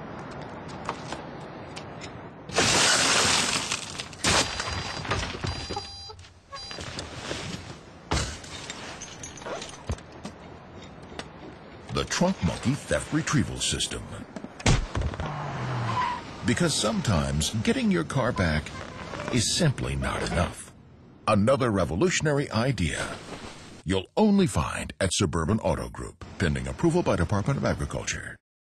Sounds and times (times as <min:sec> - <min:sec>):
Speech: 0:11.9 - 0:14.3, 0:16.4 - 0:23.2, 0:23.8 - 0:28.4.